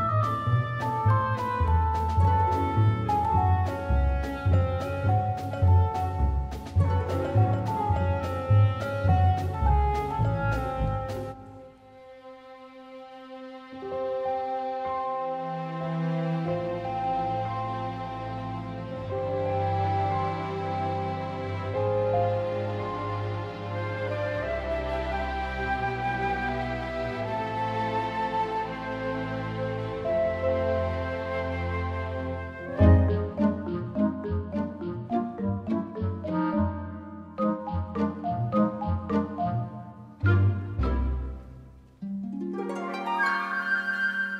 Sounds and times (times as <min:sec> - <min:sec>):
Music: 0:00.0 - 0:44.3.